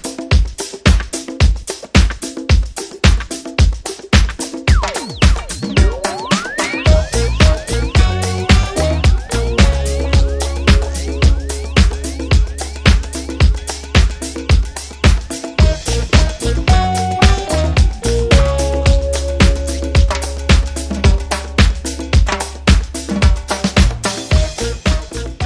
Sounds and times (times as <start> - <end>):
Music: 0.0 - 25.4.